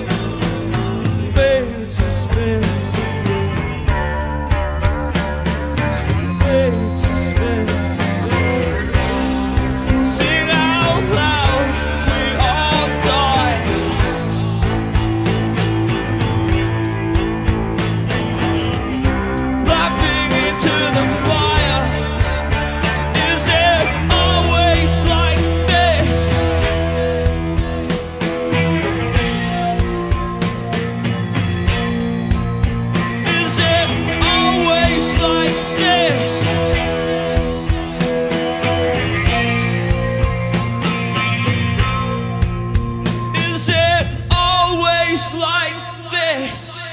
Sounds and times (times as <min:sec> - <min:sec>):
Rock music: 0:00.0 - 0:46.9
Singing: 0:06.2 - 0:14.8, 0:19.6 - 0:26.6, 0:33.2 - 0:37.1.